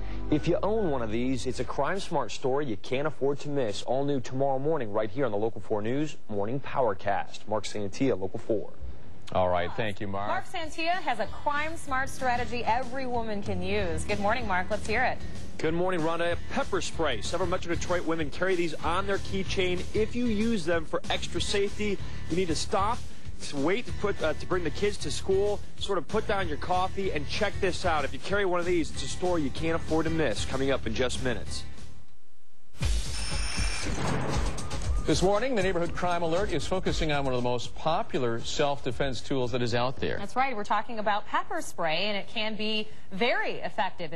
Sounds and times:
Music: 0:00.0 - 0:03.9, 0:10.3 - 0:31.9, 0:32.8 - 0:39.8
Speech: 0:14.3 - 0:31.6, 0:35.1 - 0:40.1.

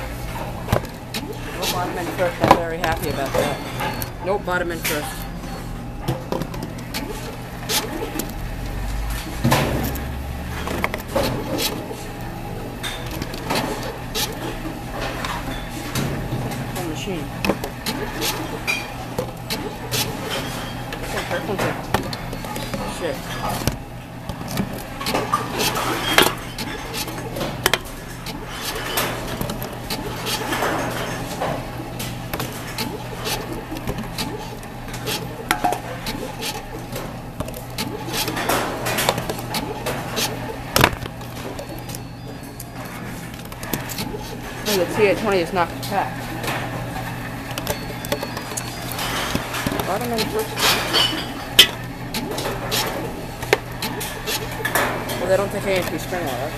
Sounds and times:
Speech: 0:01.6 - 0:03.6, 0:04.2 - 0:05.2, 0:16.8 - 0:17.3, 0:22.8 - 0:23.2, 0:44.7 - 0:46.1, 0:49.8 - 0:50.6, 0:55.2 - 0:56.5.

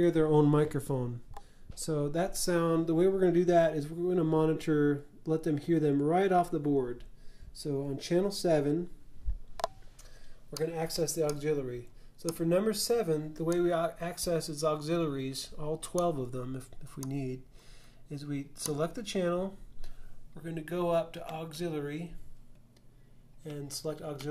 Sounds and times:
Speech: 0:00.0 - 0:09.0, 0:10.5 - 0:17.5, 0:18.1 - 0:19.6, 0:20.4 - 0:22.2, 0:23.4 - 0:24.3.

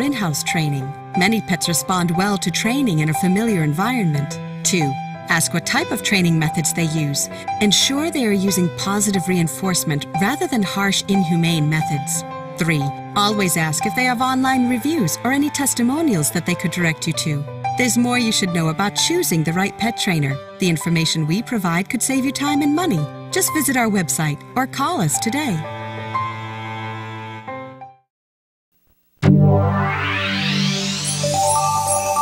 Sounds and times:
Speech: 0:00.0 - 0:25.6
Music: 0:00.0 - 0:28.1, 0:29.2 - 0:32.2.

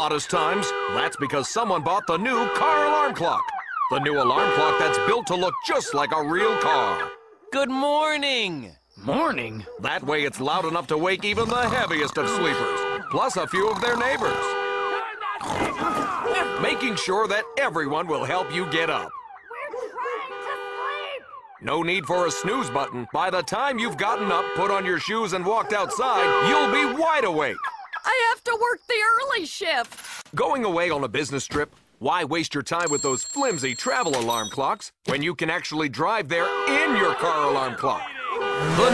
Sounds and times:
Speech: 0:00.0 - 0:07.0, 0:07.6 - 0:14.4, 0:15.0 - 0:29.8, 0:30.4 - 0:38.9
Alarm clock: 0:32.8 - 0:34.7.

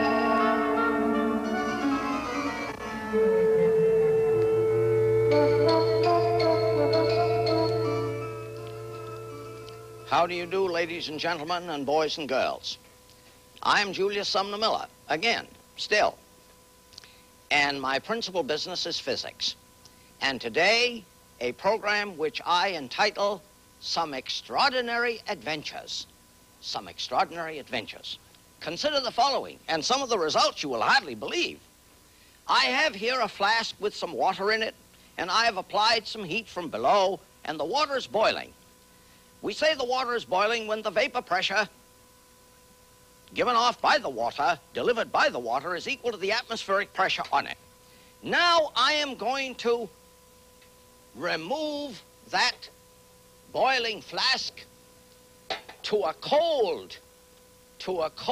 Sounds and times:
Music: 0:00.0 - 0:11.0.

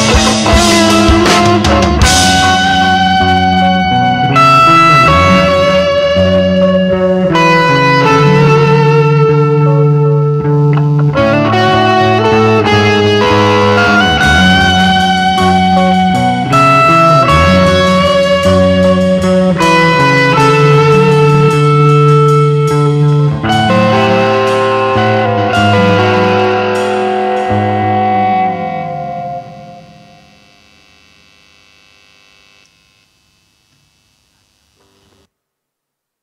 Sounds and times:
Music: 0:00.0 - 0:32.7.

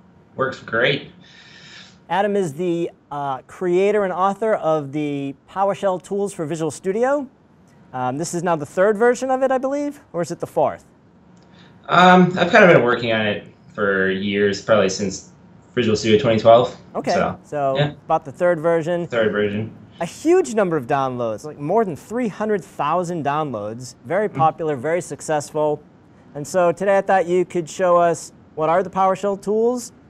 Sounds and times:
Speech: 0:00.4 - 0:07.3, 0:08.0 - 0:10.8, 0:11.9 - 0:25.8, 0:26.4 - 0:30.0.

